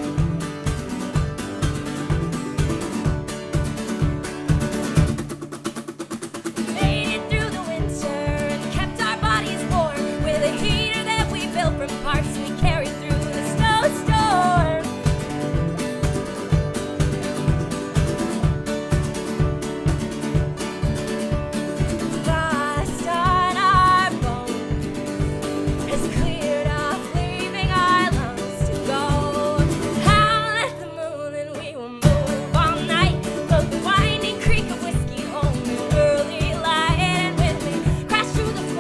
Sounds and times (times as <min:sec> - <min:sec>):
Acoustic guitar: 0:00.0 - 0:38.8.